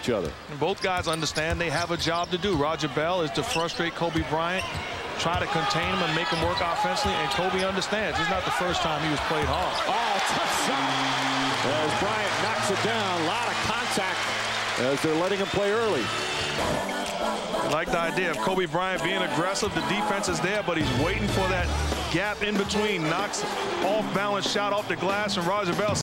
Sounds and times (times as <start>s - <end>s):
Speech: 0.0s - 11.0s, 14.8s - 16.1s, 17.7s - 26.0s
Music: 8.4s - 26.0s.